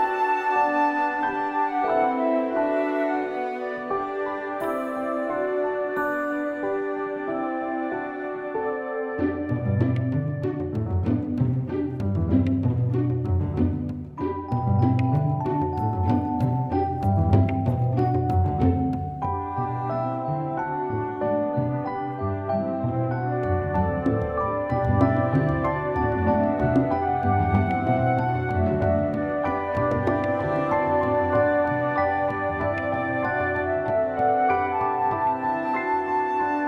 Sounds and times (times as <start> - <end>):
Music: 0.0 - 36.6.